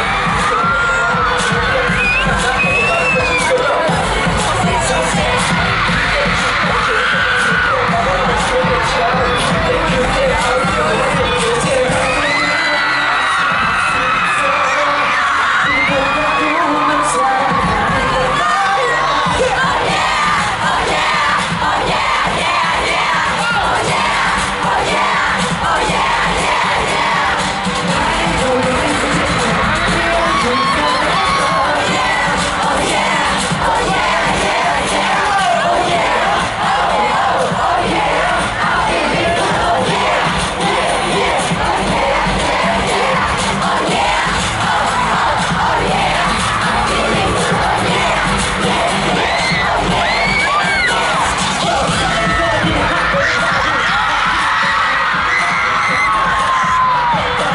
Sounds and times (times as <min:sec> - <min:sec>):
Rhythm and blues: 0:00.0 - 0:57.5.